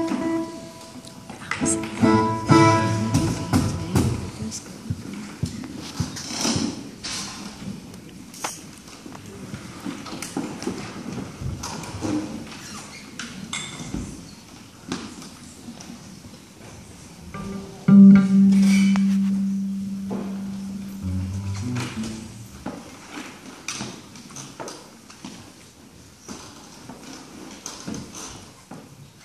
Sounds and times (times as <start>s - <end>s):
Music: 0.0s - 4.4s, 17.4s - 22.8s.